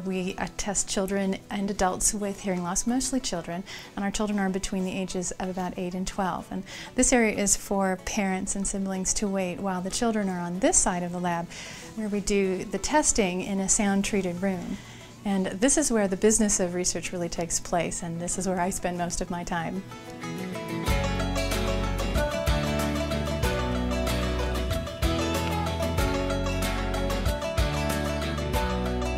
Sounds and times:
Female speech, woman speaking: 0.0 - 19.8
Narration, monologue: 0.0 - 20.8
Music: 0.0 - 29.1.

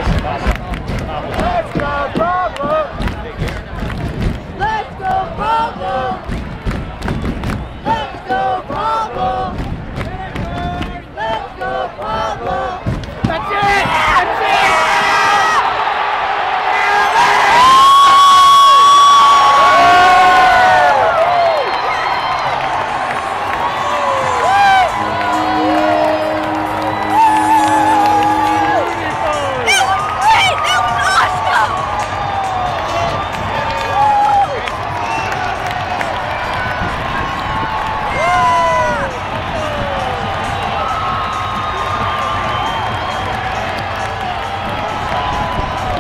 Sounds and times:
Music: 19.7 - 46.0.

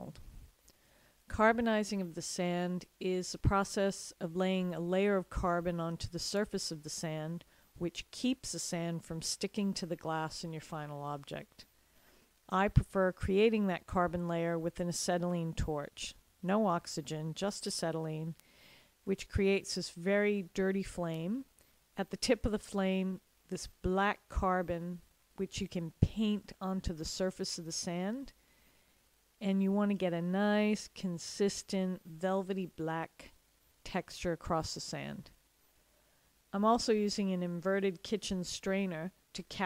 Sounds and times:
Speech: 0.0 - 0.2, 1.3 - 11.7, 12.5 - 18.4, 19.1 - 28.4, 29.4 - 35.4, 36.6 - 39.6.

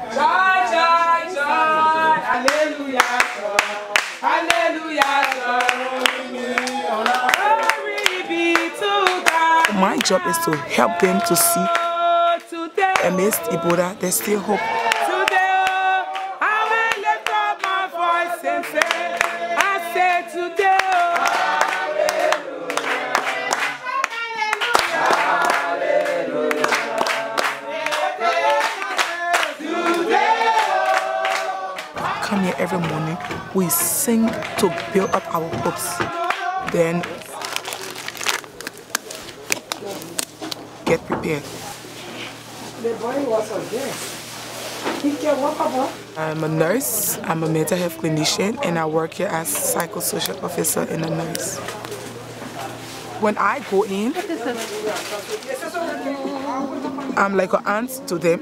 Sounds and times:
Speech: 9.6 - 11.8, 13.0 - 14.7, 32.2 - 36.0, 36.7 - 37.3, 40.9 - 41.5, 45.1 - 51.7, 53.2 - 58.4.

